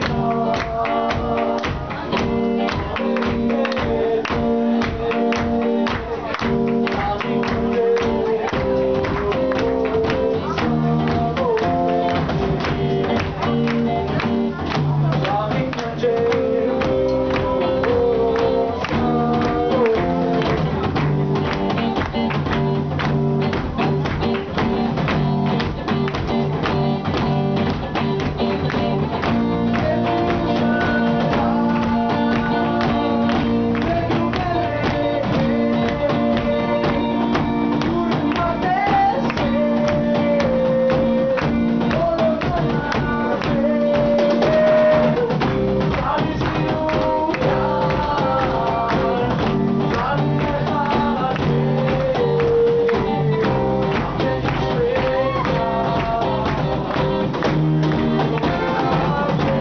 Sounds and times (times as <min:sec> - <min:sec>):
Punk rock: 0:00.0 - 0:59.6
Rock and roll: 0:00.0 - 0:59.6.